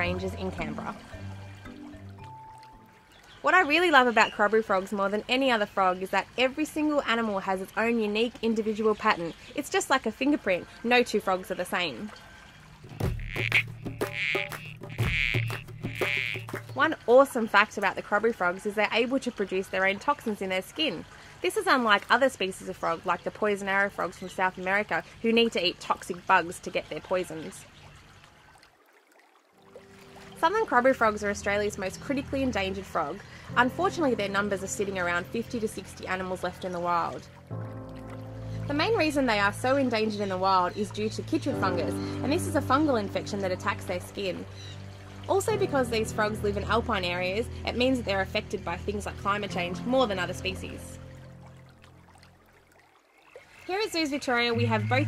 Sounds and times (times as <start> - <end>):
Speech: 0.0 - 1.0, 3.4 - 12.1, 16.8 - 27.6, 30.4 - 37.2, 38.7 - 44.5, 45.3 - 51.0, 53.7 - 55.0.